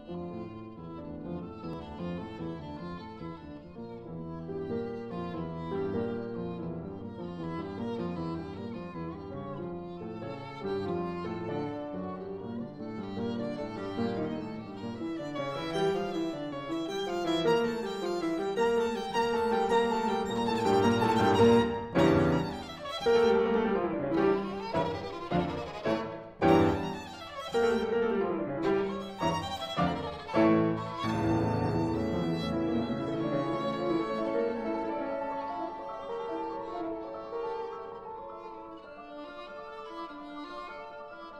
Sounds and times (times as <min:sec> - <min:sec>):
Violin, fiddle: 0:00.0 - 0:41.3.